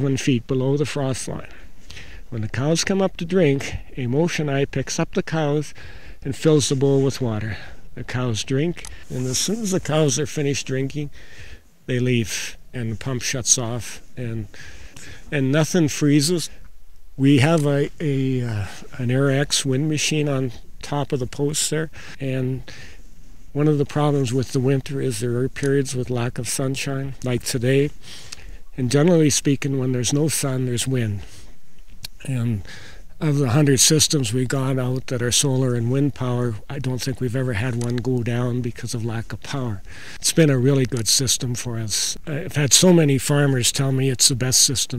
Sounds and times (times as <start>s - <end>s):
Speech: 0.0s - 1.7s, 2.3s - 11.2s, 11.9s - 14.6s, 15.3s - 16.6s, 17.2s - 22.8s, 23.5s - 28.0s, 28.7s - 31.3s, 32.1s - 44.9s.